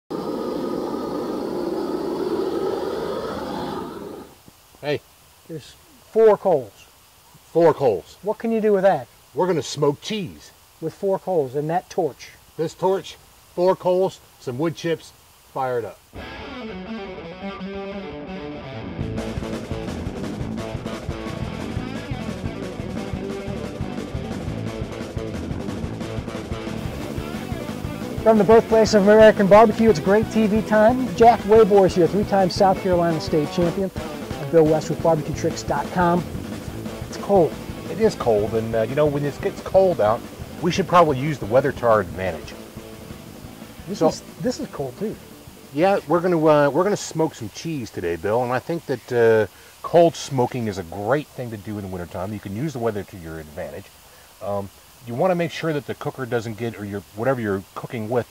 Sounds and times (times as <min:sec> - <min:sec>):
Outside, rural or natural: 0:00.0 - 0:17.0, 0:19.2 - 0:58.3
Speech: 0:04.8 - 0:06.9, 0:07.5 - 0:16.0, 0:28.2 - 0:36.3, 0:37.1 - 0:42.6, 0:43.9 - 0:58.3.